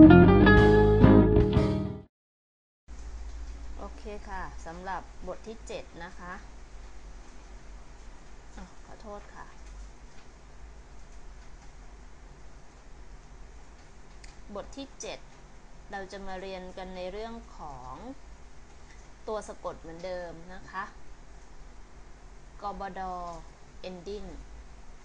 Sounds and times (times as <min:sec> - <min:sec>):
Speech: 0:03.8 - 0:06.5, 0:08.6 - 0:09.6, 0:14.5 - 0:15.2, 0:15.9 - 0:18.2, 0:19.3 - 0:21.0, 0:22.6 - 0:24.4.